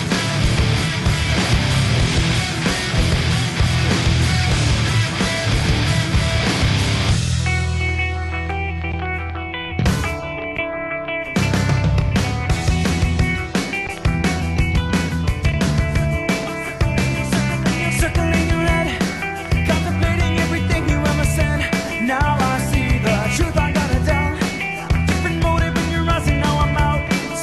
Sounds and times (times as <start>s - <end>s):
Music: 0.0s - 27.4s.